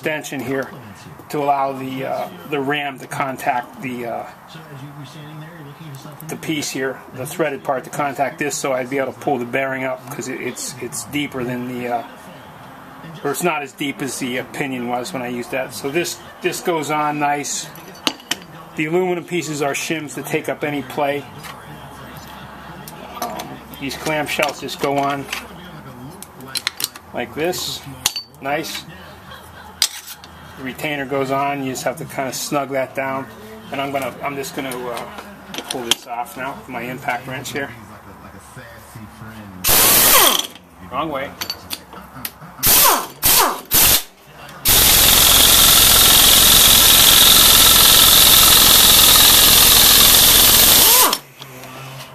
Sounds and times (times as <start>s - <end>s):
Speech: 0.0s - 29.4s, 30.6s - 39.7s, 40.7s - 42.7s.